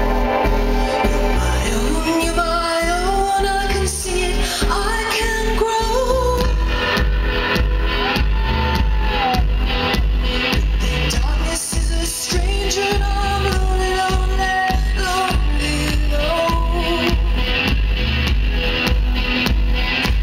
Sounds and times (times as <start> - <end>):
Music: 0.0 - 20.2.